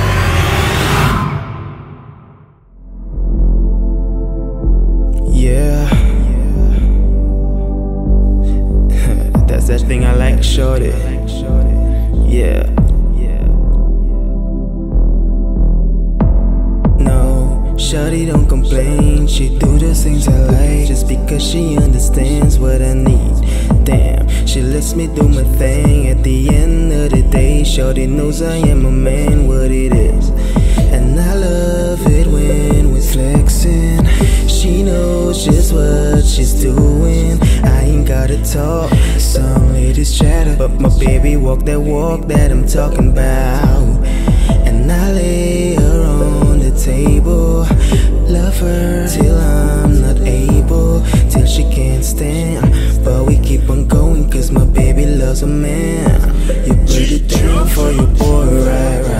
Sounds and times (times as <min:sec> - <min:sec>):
Music: 0:02.7 - 0:59.1.